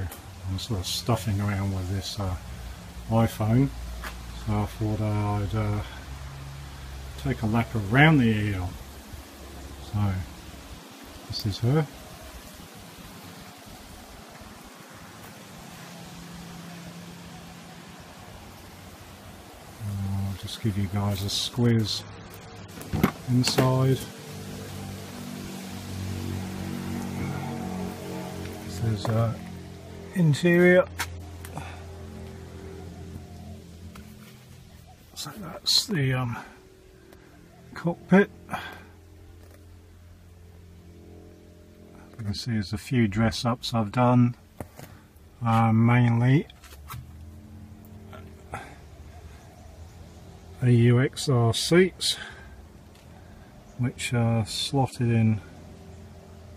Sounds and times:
Speech: 0.0 - 2.5, 3.1 - 6.1, 7.2 - 8.8, 9.8 - 10.3, 11.3 - 12.0, 19.8 - 22.1, 23.0 - 24.1, 28.6 - 31.0, 35.2 - 36.6, 37.8 - 38.9, 42.1 - 44.4, 45.4 - 46.5, 50.6 - 52.4, 53.8 - 55.5.

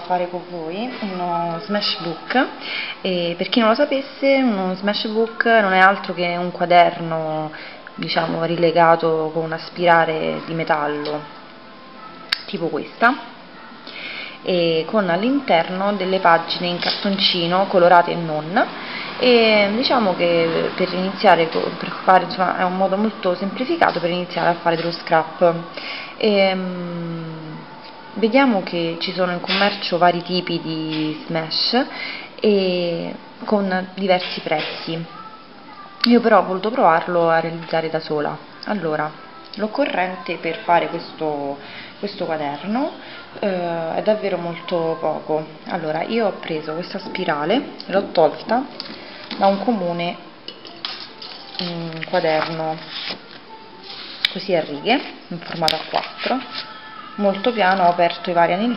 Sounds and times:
Speech: 0.0 - 11.4, 12.3 - 13.3, 14.4 - 48.7, 49.4 - 50.2, 51.3 - 52.9, 54.3 - 56.6, 57.2 - 58.7
Music: 9.5 - 17.6, 37.6 - 42.2, 48.7 - 58.7.

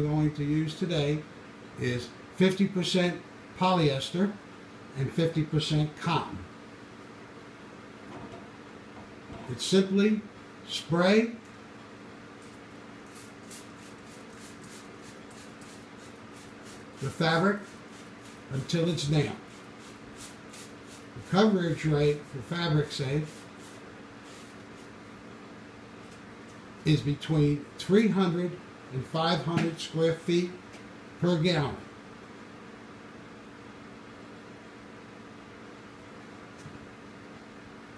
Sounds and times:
Speech: 0.0 - 6.5, 9.5 - 11.4, 17.0 - 17.7, 18.5 - 19.4, 21.2 - 23.3, 26.8 - 30.6, 31.2 - 31.9
Spray: 13.0 - 21.4, 23.2 - 25.0.

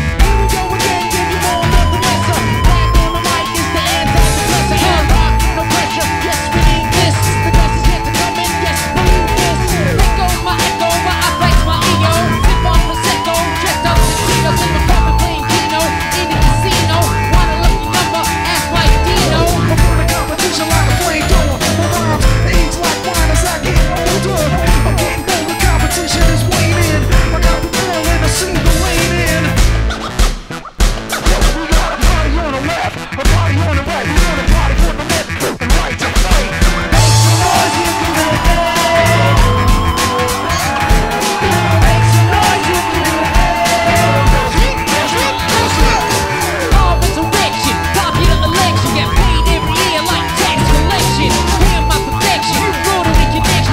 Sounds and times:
Music: 0.0 - 53.7.

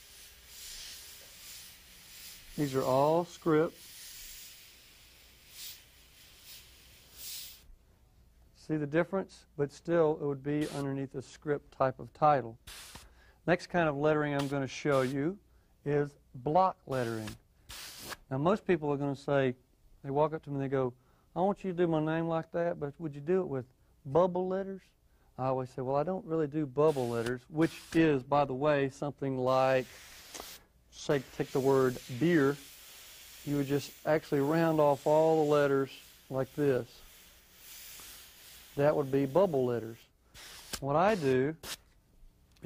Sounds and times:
Inside, small room: 0.0 - 42.6
Speech: 2.6 - 3.8, 8.6 - 12.6, 13.4 - 17.4, 18.3 - 29.9, 30.9 - 32.6, 33.5 - 37.0, 38.8 - 40.0, 40.8 - 41.6.

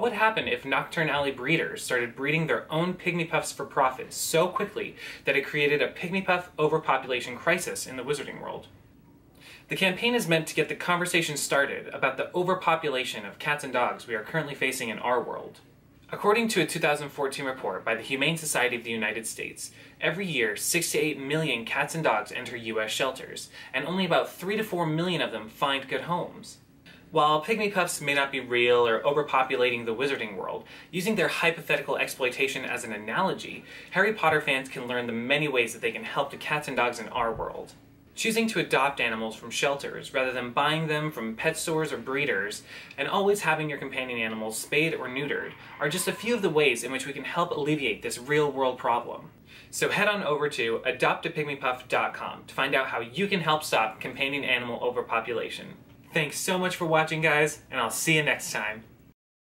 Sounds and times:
Speech: 0.0 - 8.8, 9.7 - 59.0.

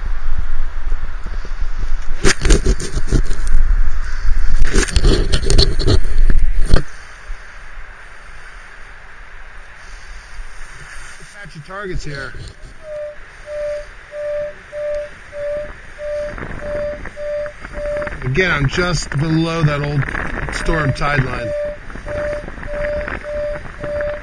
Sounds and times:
Outside, urban or manmade: 0.0 - 24.2
Speech: 11.2 - 12.4, 18.2 - 21.6.

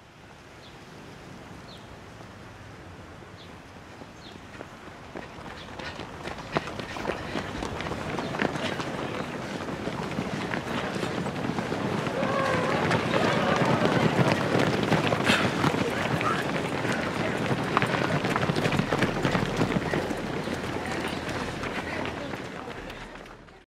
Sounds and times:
Outside, rural or natural: 0.0 - 23.6
Run: 3.4 - 23.6
Speech: 15.2 - 18.3, 18.9 - 23.6.

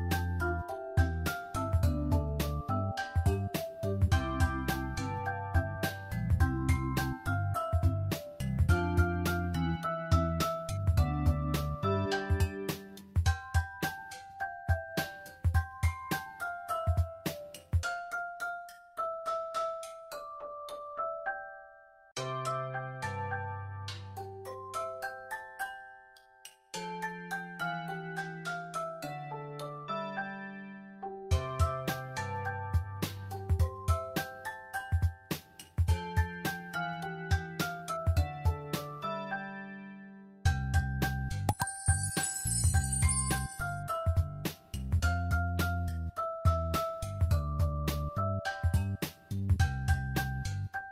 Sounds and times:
Christmas music: 0.0 - 50.9.

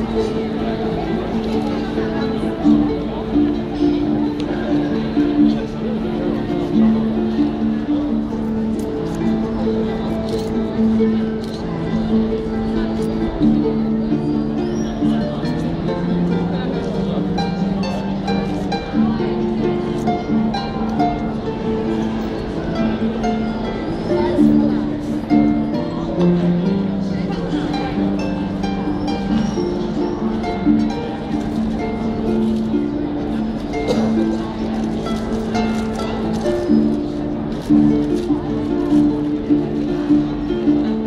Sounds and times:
Music: 0.0 - 41.0
Speech: 0.0 - 41.0.

